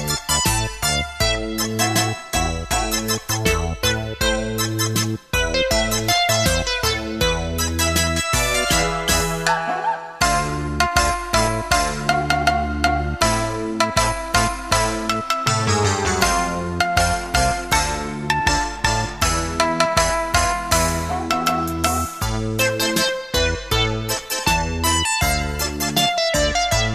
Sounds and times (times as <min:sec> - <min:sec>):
Video game music: 0:00.1 - 0:26.9.